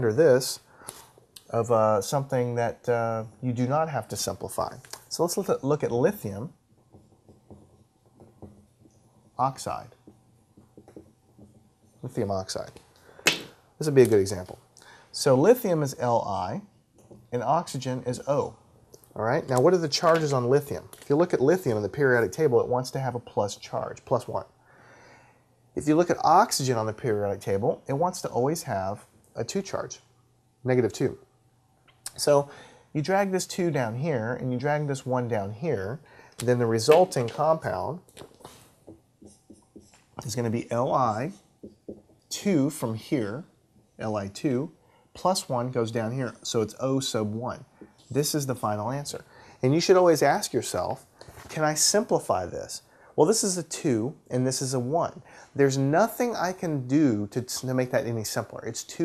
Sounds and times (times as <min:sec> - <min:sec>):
Speech: 0:00.0 - 0:00.6, 0:01.4 - 0:06.6, 0:09.4 - 0:10.0, 0:12.0 - 0:12.8, 0:13.8 - 0:16.7, 0:17.3 - 0:18.6, 0:19.2 - 0:24.5, 0:25.8 - 0:31.2, 0:32.1 - 0:38.0, 0:40.2 - 0:41.4, 0:42.3 - 0:59.0.